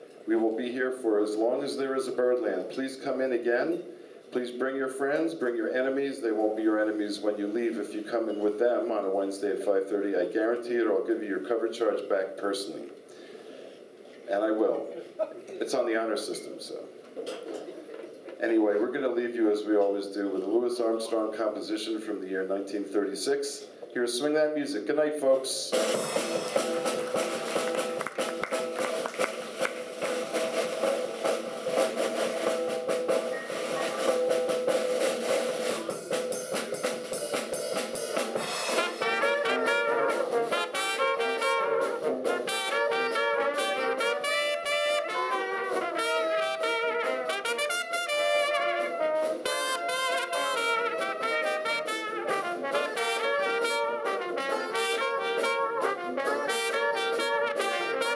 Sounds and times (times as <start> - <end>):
Speech: 0.3 - 13.0, 14.3 - 17.0, 18.4 - 25.8
Swing music: 25.7 - 58.1.